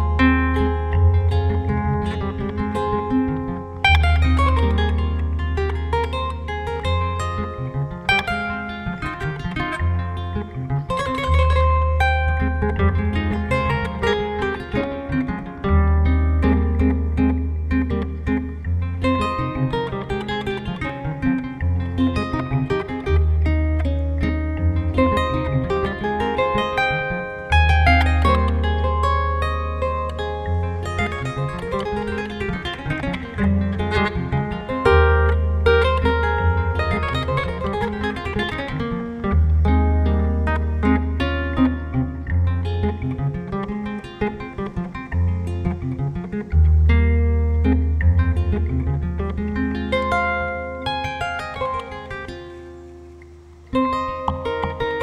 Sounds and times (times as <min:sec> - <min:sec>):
Harp: 0:00.0 - 0:55.0
Pizzicato: 0:00.0 - 0:55.0.